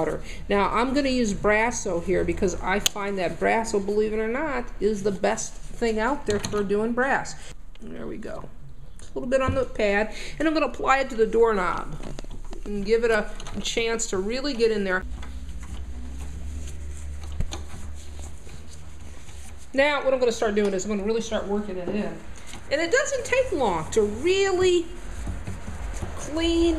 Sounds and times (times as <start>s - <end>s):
Speech: 0.0s - 8.5s, 9.2s - 12.0s, 12.6s - 15.0s, 19.8s - 25.0s, 26.2s - 26.7s.